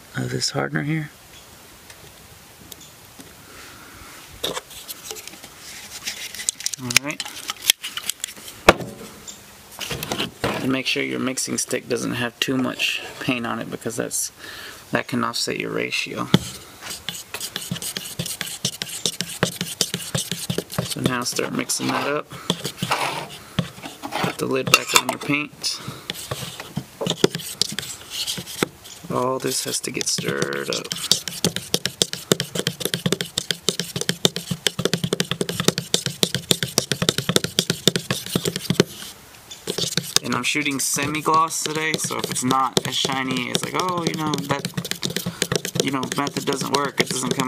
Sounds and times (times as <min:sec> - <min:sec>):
Speech: 0:00.1 - 0:01.2, 0:06.8 - 0:07.2, 0:10.6 - 0:16.4, 0:21.0 - 0:22.3, 0:24.4 - 0:25.8, 0:29.1 - 0:31.0, 0:40.2 - 0:44.7, 0:45.7 - 0:47.4.